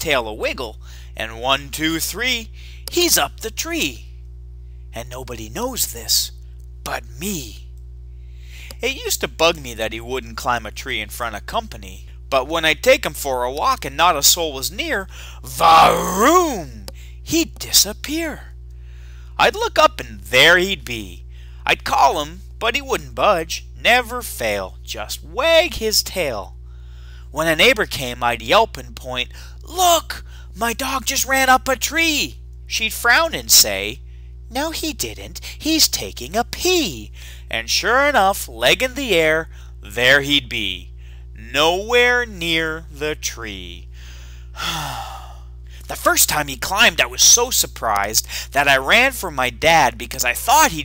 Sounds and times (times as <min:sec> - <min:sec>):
Speech: 0:00.0 - 0:04.1, 0:05.0 - 0:07.7, 0:08.6 - 0:18.6, 0:19.4 - 0:26.6, 0:27.3 - 0:43.9, 0:45.8 - 0:50.8.